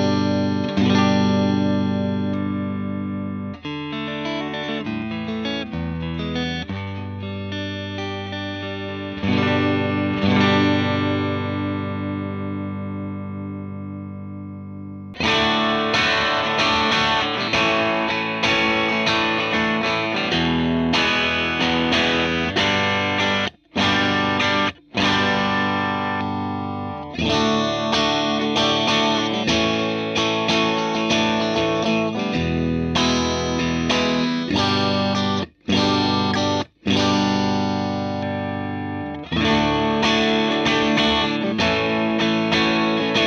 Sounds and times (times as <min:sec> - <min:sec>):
Electric guitar: 0:00.0 - 0:43.2.